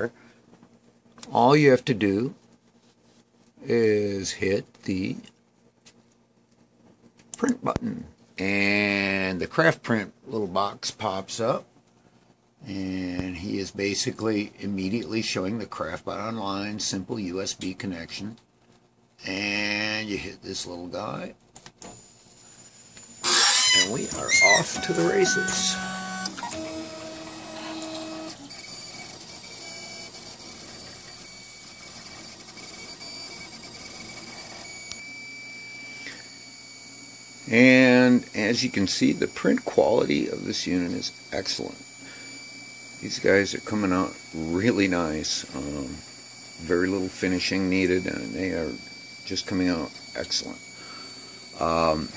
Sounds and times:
Speech: 1.2 - 2.4, 3.6 - 5.3, 7.4 - 11.7, 12.6 - 18.4, 19.2 - 21.4, 23.8 - 25.9, 37.5 - 41.8, 43.0 - 46.0, 46.6 - 50.6, 51.6 - 52.1.

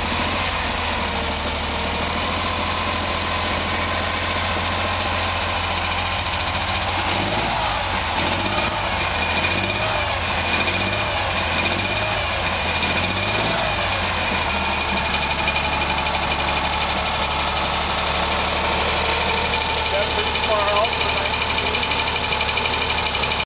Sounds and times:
Idling: 0.0 - 23.4
Medium engine (mid frequency): 0.0 - 23.4
Vehicle: 0.0 - 23.4
Speech: 19.9 - 21.9.

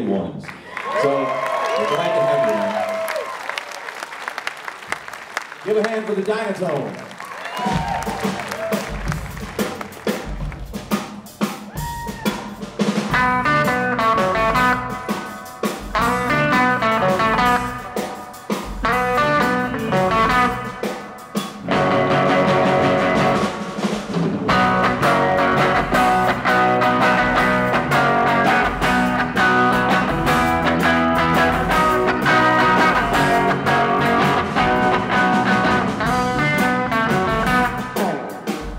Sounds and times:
Speech: 0.0 - 0.4, 1.0 - 2.7, 5.6 - 7.0
Blues: 7.2 - 38.7.

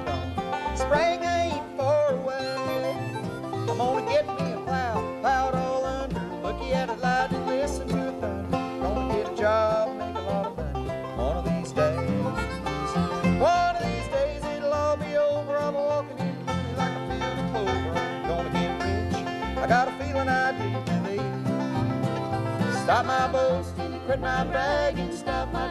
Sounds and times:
Bluegrass: 0.0 - 25.7.

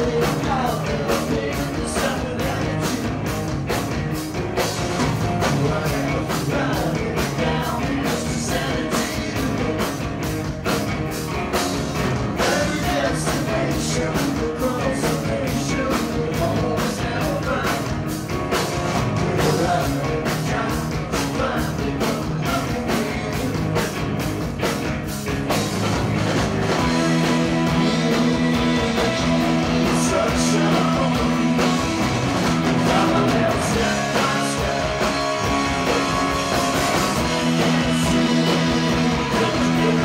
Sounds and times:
Rock and roll: 0.0 - 40.0.

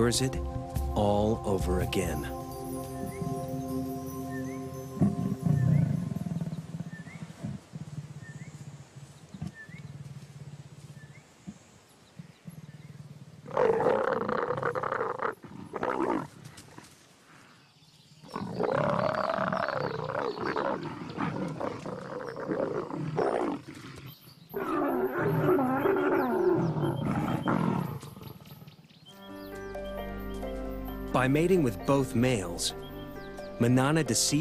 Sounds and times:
Speech: 0.0 - 0.4, 1.0 - 2.4, 31.2 - 32.8, 33.6 - 34.4
Music: 0.0 - 6.7, 29.1 - 34.4
Roar: 5.6 - 8.6, 12.9 - 17.0, 18.3 - 28.9.

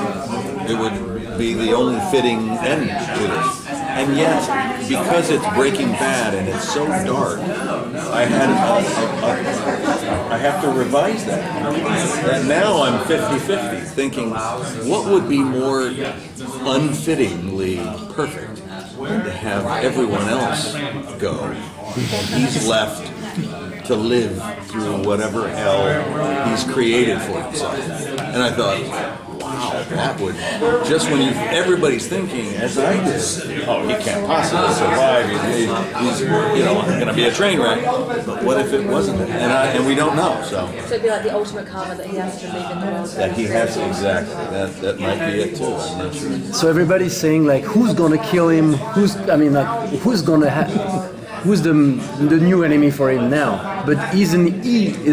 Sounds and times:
Speech: 0.0 - 55.1.

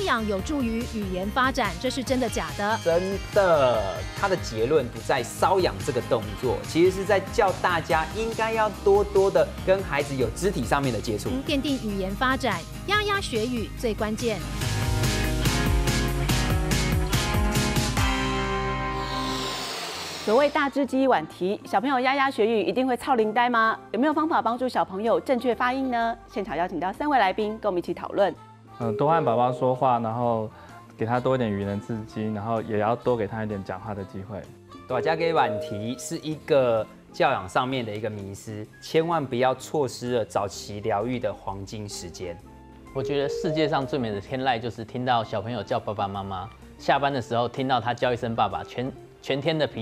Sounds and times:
Music: 0.0 - 49.8.

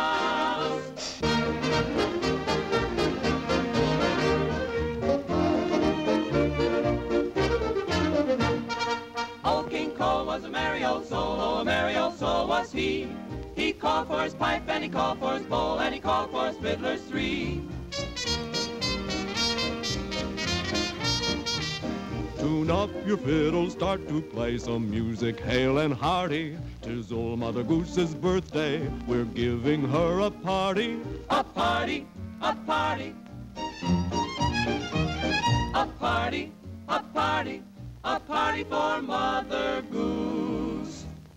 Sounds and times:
Music: 0.0 - 41.3.

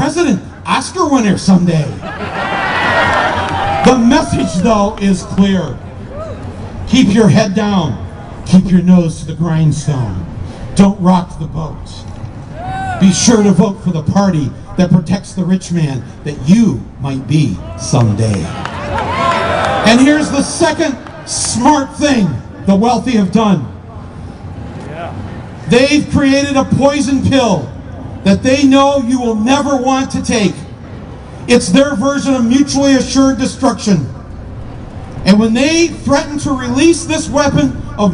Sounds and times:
Male speech, man speaking: 0.0 - 2.0, 3.8 - 5.8, 6.9 - 12.1, 13.0 - 18.6, 19.8 - 23.7, 24.8 - 30.7, 31.5 - 34.2, 35.2 - 38.1
Narration, monologue: 0.0 - 2.1, 3.8 - 18.6, 19.8 - 38.1.

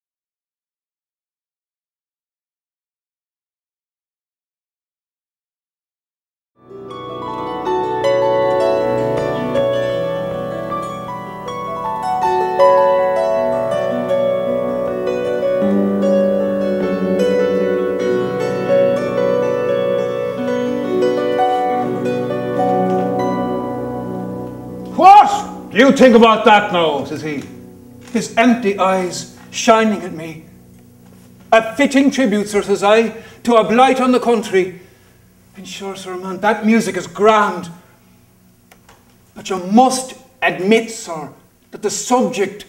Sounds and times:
Speech: 25.0 - 27.5, 28.1 - 30.5, 31.5 - 34.8, 35.6 - 37.8, 39.4 - 42.6.

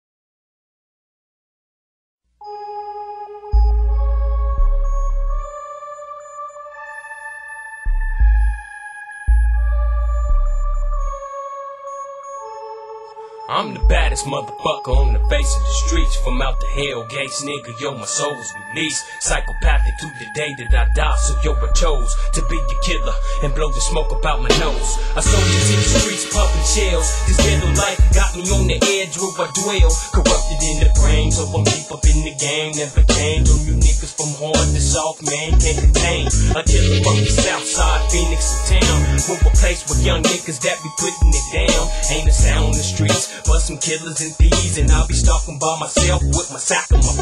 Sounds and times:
Dance music: 13.1 - 47.2
Blues: 34.6 - 40.5.

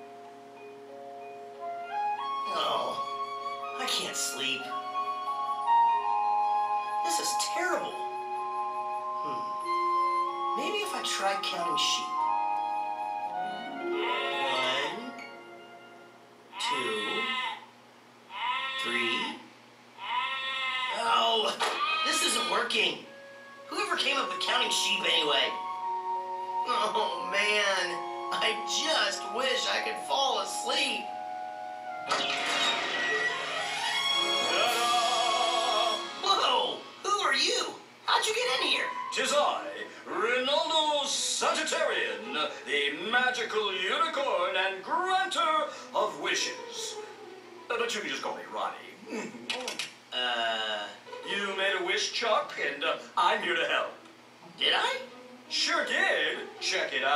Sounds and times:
Music: 0.0 - 17.2, 22.1 - 48.9, 50.2 - 57.1.

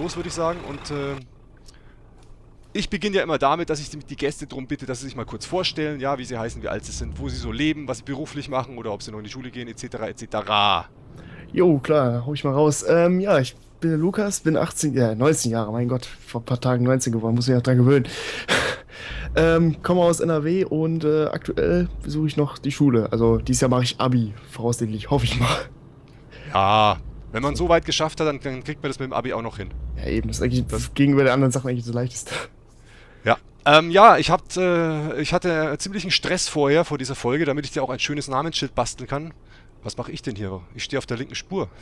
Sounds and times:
Speech: 0.0 - 1.3, 2.8 - 25.7, 26.4 - 32.5, 33.3 - 41.8
Vehicle: 0.0 - 41.8.

